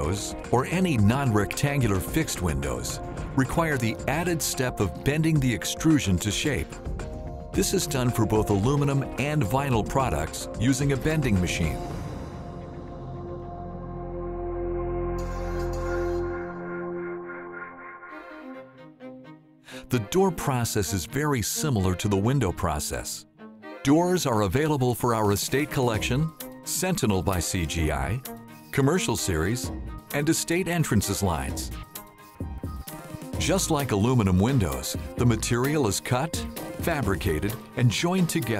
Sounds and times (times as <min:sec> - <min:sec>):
Speech: 0:00.0 - 0:06.8, 0:07.6 - 0:11.9, 0:19.8 - 0:31.8, 0:33.4 - 0:38.5
Music: 0:00.0 - 0:38.5.